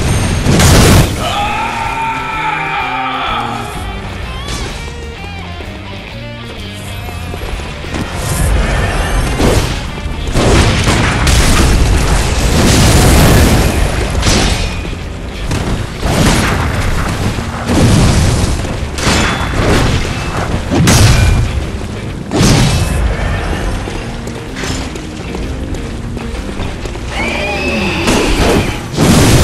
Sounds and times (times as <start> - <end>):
Music: 0.0 - 29.4.